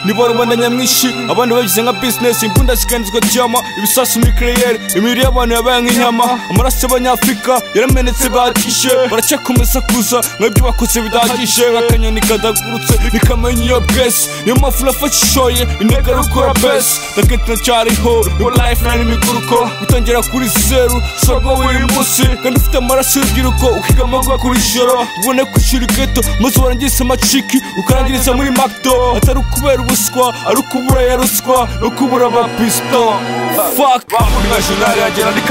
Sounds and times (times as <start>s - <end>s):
Music: 0.0s - 35.5s.